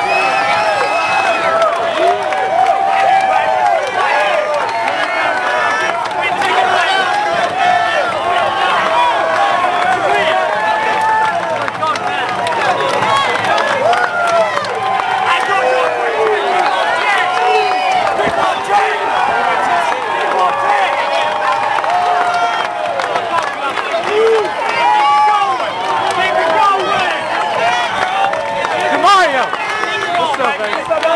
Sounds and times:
Speech: 1.4 - 21.4, 23.0 - 31.1.

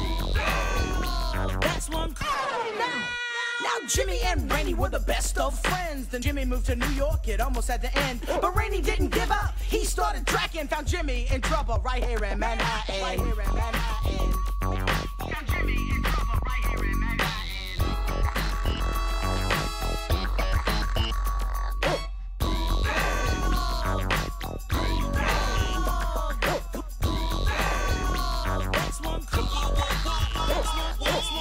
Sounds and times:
Music: 0.0 - 2.3, 3.6 - 31.4.

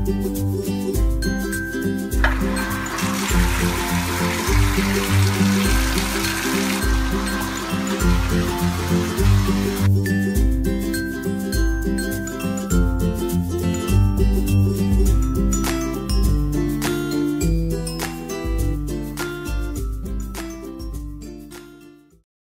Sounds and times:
Music: 0.0 - 22.2.

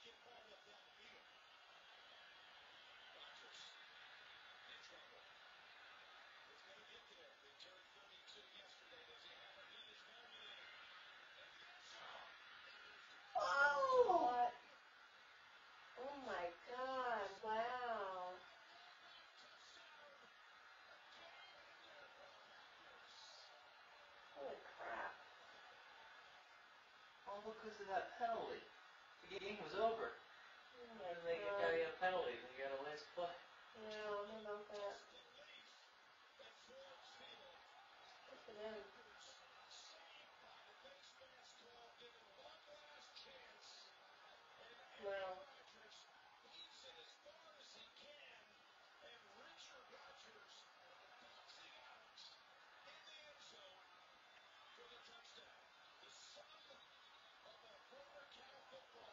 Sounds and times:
Speech: 6.4 - 14.7, 16.0 - 25.8, 30.8 - 59.1.

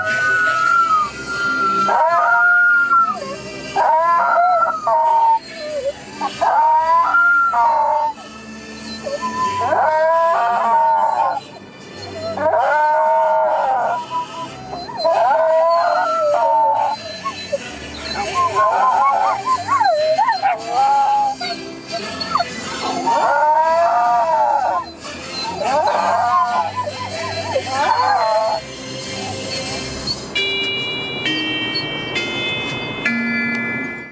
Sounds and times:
Howl: 0.0 - 28.6
Music: 0.0 - 34.1.

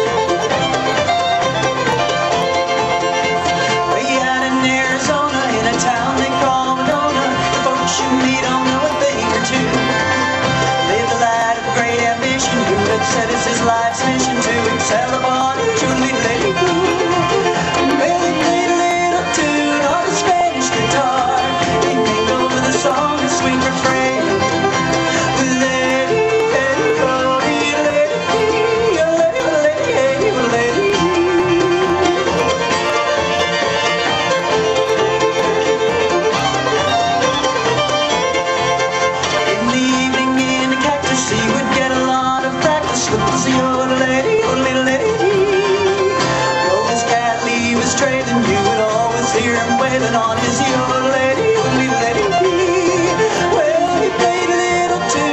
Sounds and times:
Music: 0.0 - 55.3.

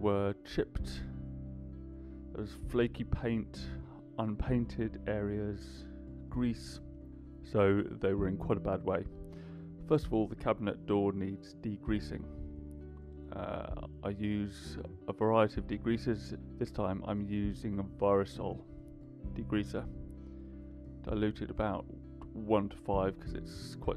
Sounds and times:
Speech: 0.0 - 1.1, 2.4 - 6.8, 7.4 - 9.1, 9.9 - 12.3, 13.3 - 18.6, 19.4 - 19.9, 21.1 - 23.9.

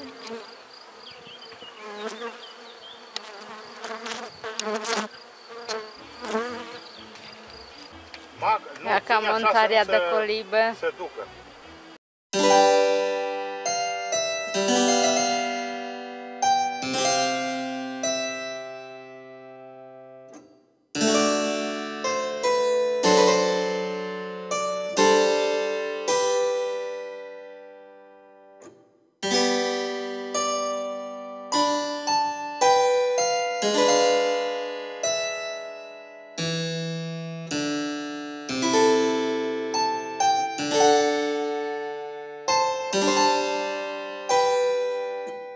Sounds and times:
Music: 12.4 - 45.5.

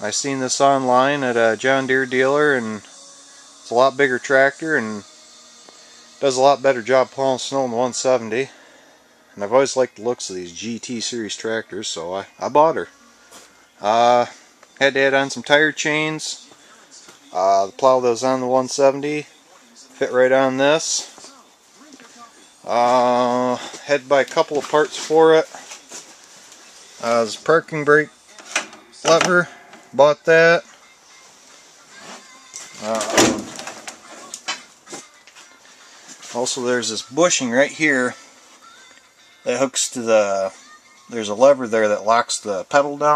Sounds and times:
Speech: 0.0 - 2.9, 3.6 - 5.0, 6.2 - 8.6, 9.4 - 12.9, 13.8 - 25.6, 27.0 - 28.2, 29.0 - 30.7, 32.8 - 33.4, 36.3 - 38.2, 39.5 - 43.1
Music: 0.0 - 43.1.

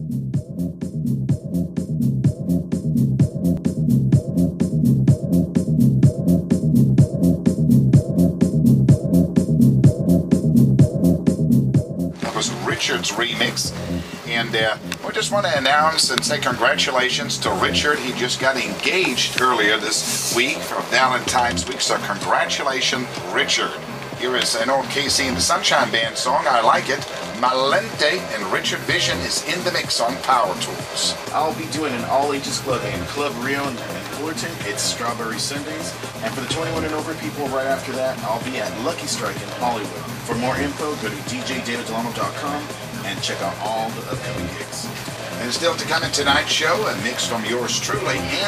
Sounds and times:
Music: 0.0 - 48.4
Speech: 12.2 - 48.4.

